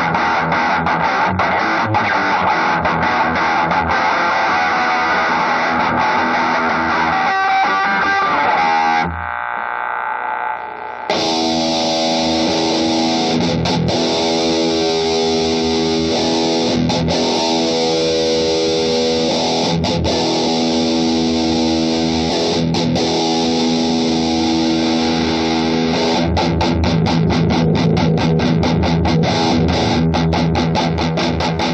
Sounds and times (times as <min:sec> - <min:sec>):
Effects unit: 0:00.0 - 0:31.7
Guitar: 0:00.0 - 0:31.7.